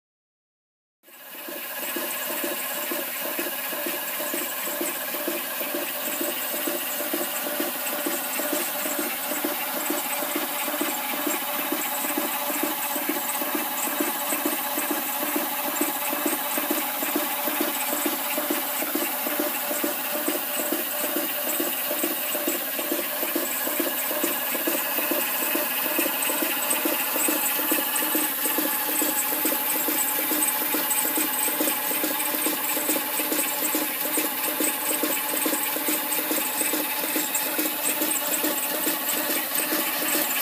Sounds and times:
Medium engine (mid frequency): 1.1s - 40.4s.

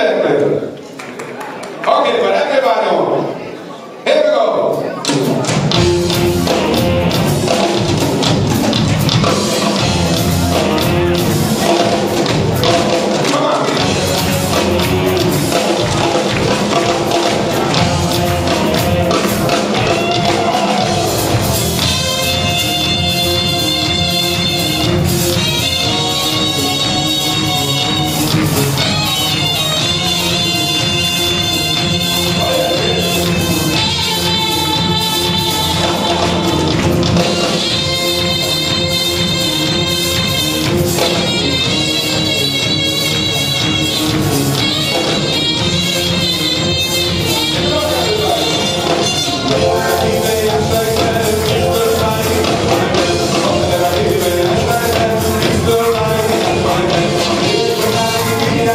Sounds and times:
Speech: 0.0s - 5.6s, 13.2s - 13.9s, 47.2s - 49.0s
Orchestra: 5.1s - 58.7s
Jazz: 5.3s - 58.7s.

